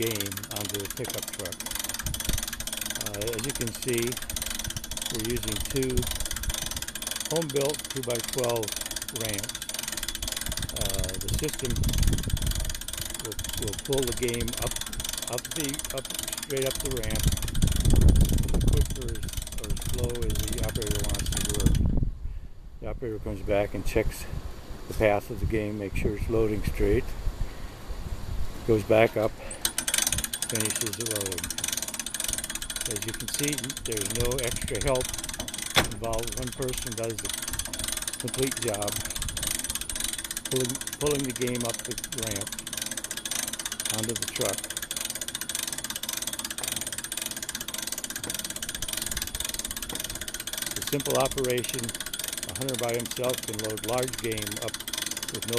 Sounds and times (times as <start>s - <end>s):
Speech: 0.0s - 1.6s, 3.0s - 4.2s, 5.1s - 6.1s, 7.3s - 9.5s, 10.7s - 11.8s, 13.2s - 14.7s, 15.3s - 17.2s, 18.7s - 21.7s, 22.8s - 24.3s, 24.9s - 27.1s, 28.7s - 29.4s, 30.5s - 31.5s, 32.9s - 35.1s, 35.9s - 37.3s, 38.2s - 39.0s, 40.5s - 42.5s, 43.9s - 44.6s, 50.8s - 51.9s, 52.5s - 54.7s, 55.3s - 55.5s.